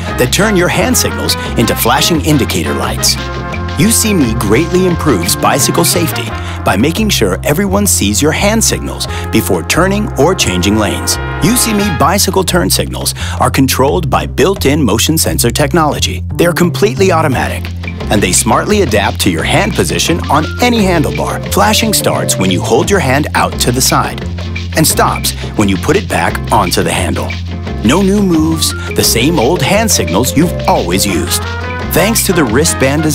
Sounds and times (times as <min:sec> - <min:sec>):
Speech: 0:00.0 - 0:03.2, 0:03.8 - 0:24.2, 0:24.8 - 0:33.1
Music: 0:00.0 - 0:33.1.